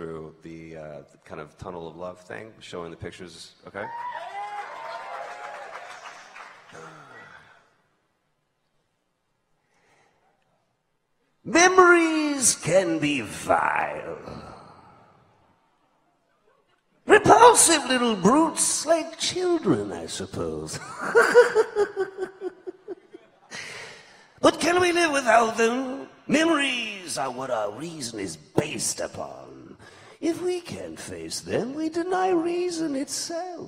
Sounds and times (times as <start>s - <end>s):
Narration, monologue: 0.0s - 3.9s, 6.9s - 33.6s.